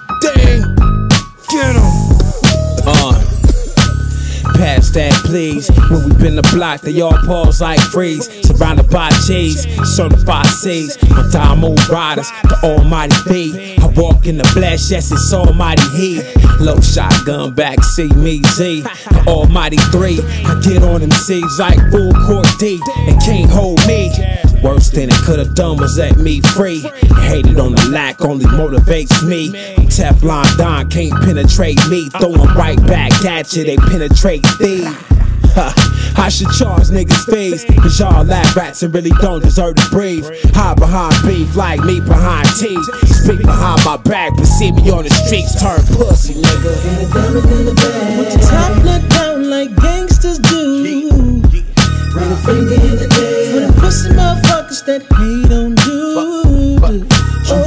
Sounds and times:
Music: 0.0s - 57.6s.

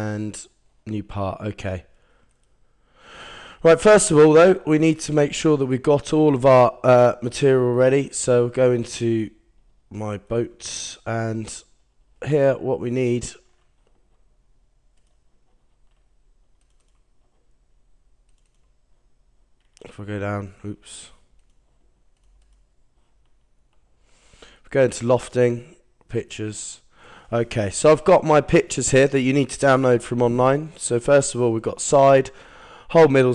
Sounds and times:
Speech: 0.0s - 1.9s, 3.6s - 13.5s, 19.8s - 21.3s, 24.7s - 33.3s.

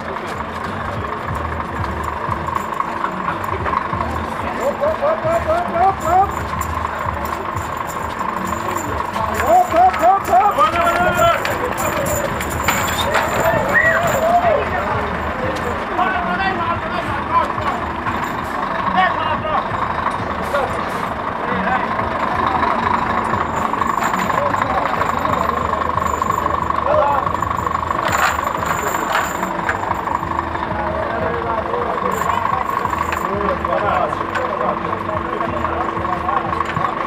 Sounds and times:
Speech: 0.0s - 17.9s, 18.7s - 23.0s, 24.0s - 29.6s, 30.6s - 37.0s
Music: 0.0s - 37.0s
Truck: 0.0s - 37.0s.

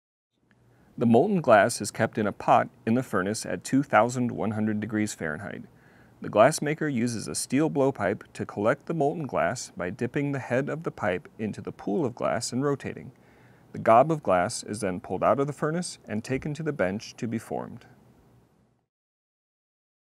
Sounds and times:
Speech: 1.0s - 13.2s, 13.8s - 18.0s.

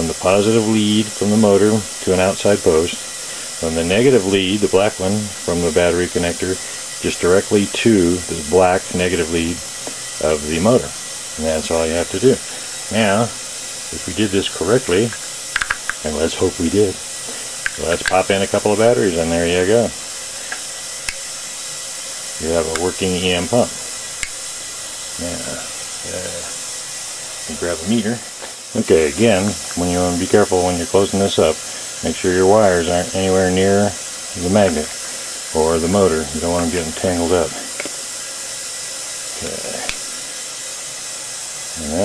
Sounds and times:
Speech: 0.0s - 3.0s, 3.6s - 9.6s, 10.2s - 15.2s, 16.0s - 17.0s, 17.8s - 20.0s, 22.4s - 23.8s, 25.2s - 26.6s, 27.5s - 34.9s, 35.5s - 37.7s, 39.4s - 39.9s, 41.8s - 42.0s.

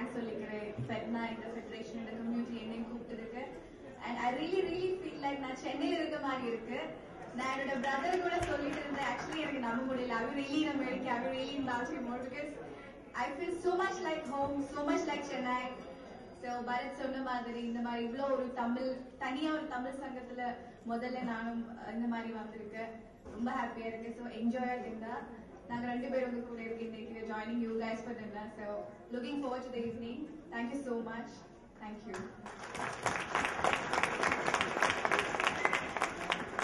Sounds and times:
Female speech, woman speaking: 0.0s - 32.3s.

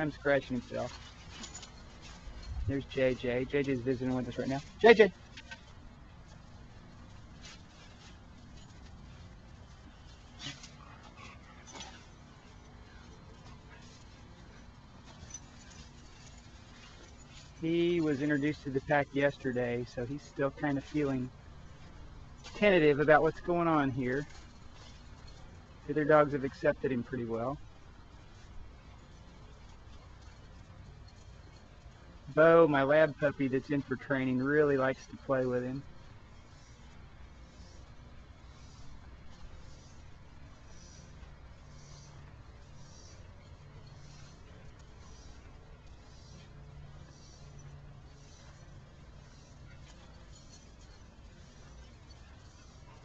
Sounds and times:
Speech: 0.0s - 0.9s, 2.7s - 5.2s, 17.6s - 21.3s, 22.5s - 24.3s, 25.9s - 27.6s, 32.3s - 35.8s.

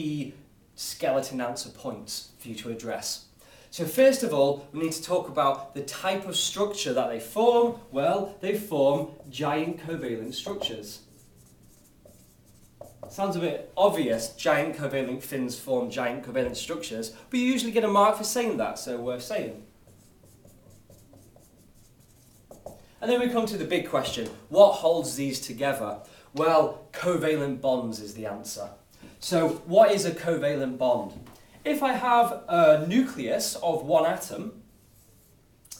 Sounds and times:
Speech: 0.0s - 11.1s, 13.1s - 19.7s, 23.0s - 34.6s
Inside, small room: 0.0s - 35.7s
Writing: 9.0s - 13.3s, 19.8s - 22.9s.

